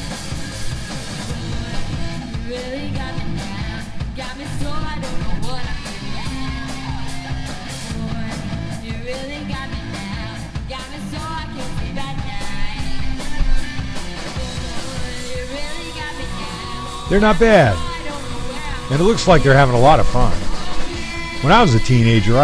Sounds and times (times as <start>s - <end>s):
Music: 0.0s - 22.4s
Speech: 17.1s - 18.1s, 18.9s - 20.4s, 21.4s - 22.4s.